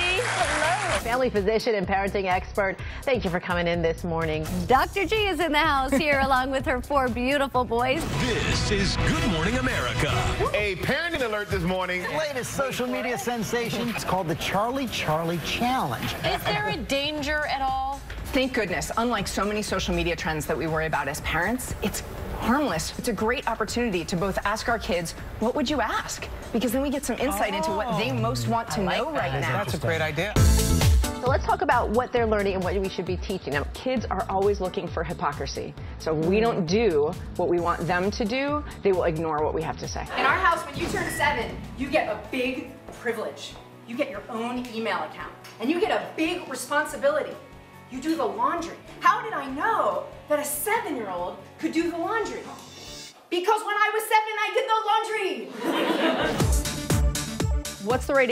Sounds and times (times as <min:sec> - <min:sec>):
Music: 0:00.0 - 0:58.3.